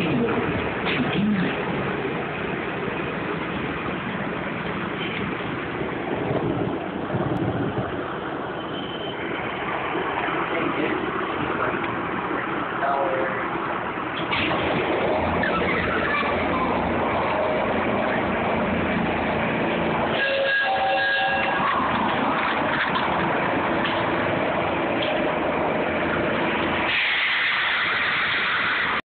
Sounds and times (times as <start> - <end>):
Vehicle: 0.0 - 29.0.